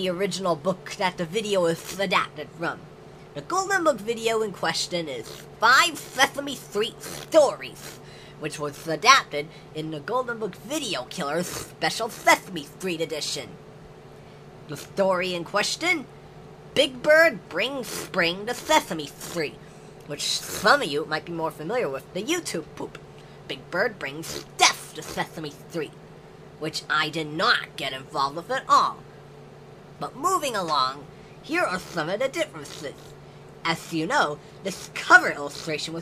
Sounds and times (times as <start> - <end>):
Speech: 0.0 - 13.6, 14.7 - 16.1, 16.8 - 26.0, 26.6 - 29.0, 30.0 - 36.0.